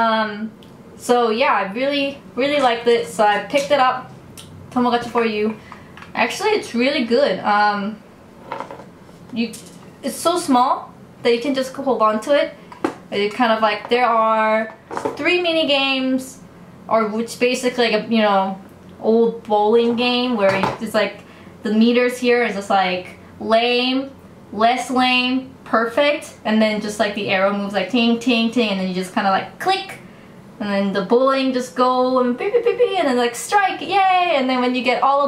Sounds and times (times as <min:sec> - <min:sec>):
Speech: 0:00.0 - 0:04.1, 0:04.8 - 0:05.6, 0:06.2 - 0:08.0, 0:09.3 - 0:30.0, 0:30.6 - 0:35.2.